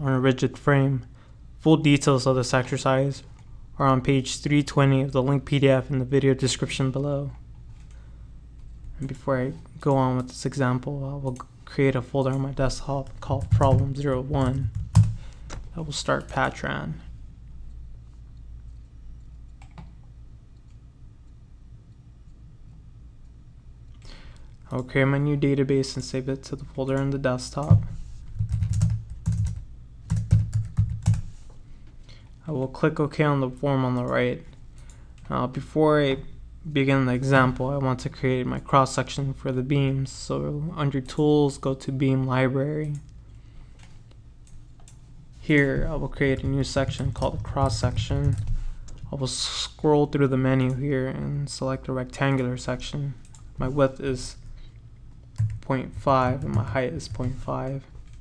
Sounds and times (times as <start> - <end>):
Speech: 0.0 - 7.4, 9.0 - 14.8, 15.7 - 17.1, 24.6 - 28.0, 32.4 - 34.6, 35.3 - 43.1, 45.4 - 48.5, 49.1 - 54.4, 55.6 - 58.0.